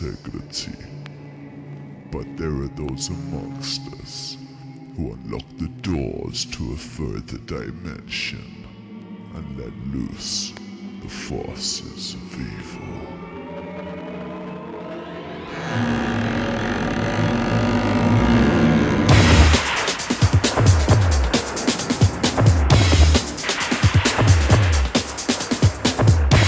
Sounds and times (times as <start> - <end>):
Music: 0.0 - 26.4.